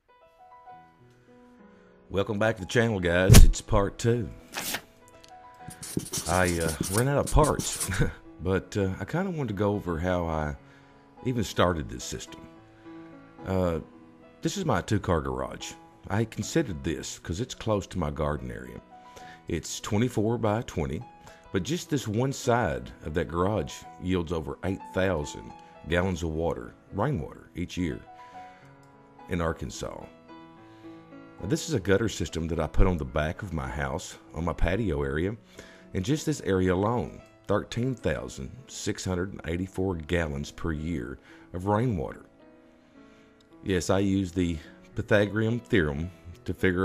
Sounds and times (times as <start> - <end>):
Music: 0.0 - 46.8
Speech: 2.1 - 4.4, 5.8 - 10.6, 11.2 - 12.5, 13.4 - 18.8, 19.5 - 21.0, 21.6 - 28.0, 29.3 - 30.1, 31.4 - 35.4, 36.0 - 42.3, 43.7 - 46.8.